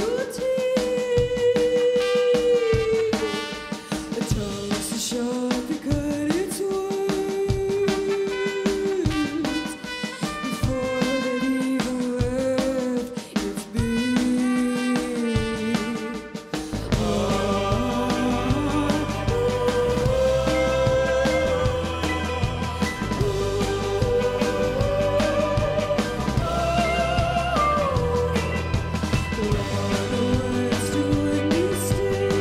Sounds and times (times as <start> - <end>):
Music: 0.0 - 32.4.